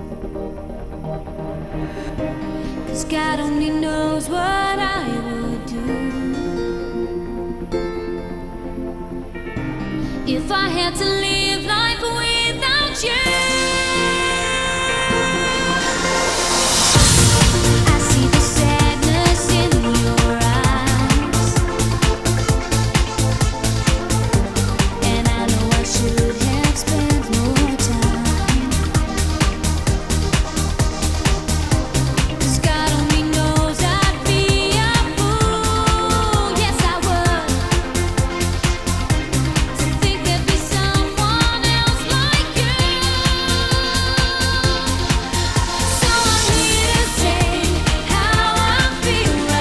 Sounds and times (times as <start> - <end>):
Music: 0.0 - 49.6.